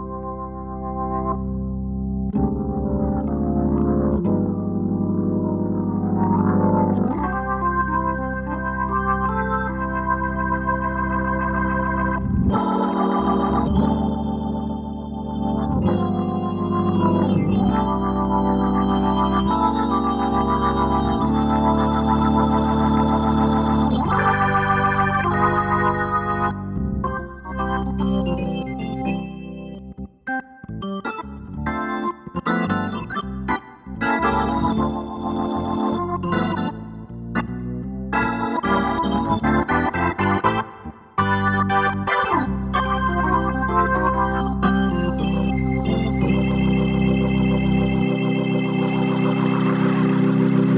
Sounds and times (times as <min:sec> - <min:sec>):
Music: 0:00.0 - 0:50.7.